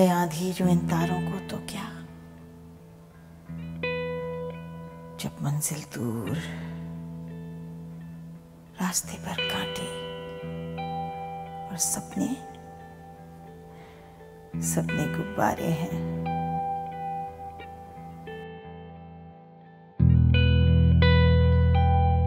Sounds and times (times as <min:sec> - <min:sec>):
Speech: 0:00.0 - 0:02.1, 0:05.2 - 0:06.7, 0:08.8 - 0:10.0, 0:11.7 - 0:12.5, 0:14.6 - 0:16.2
Music: 0:00.0 - 0:22.2.